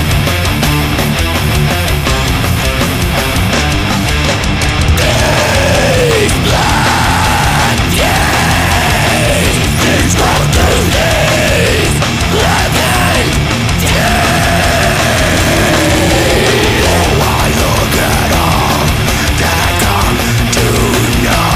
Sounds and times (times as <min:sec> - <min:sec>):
Exciting music: 0:00.0 - 0:21.5.